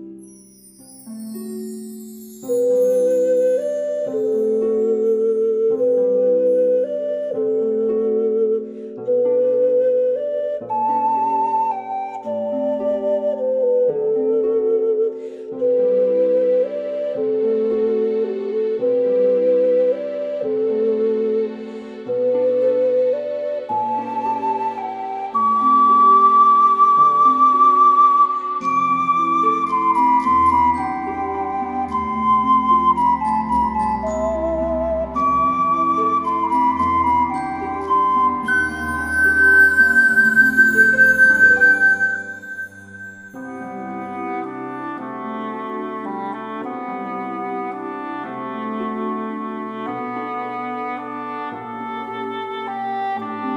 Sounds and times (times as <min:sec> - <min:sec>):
Music: 0:00.0 - 0:53.5.